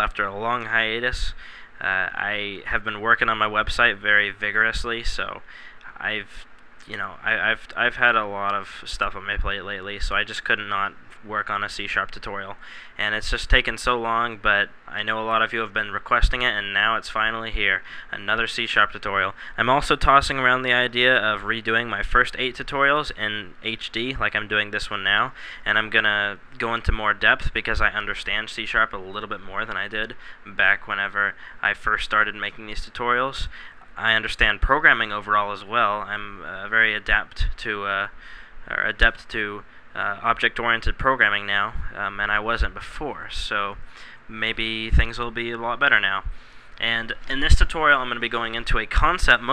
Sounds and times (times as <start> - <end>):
Speech: 0.0 - 49.5.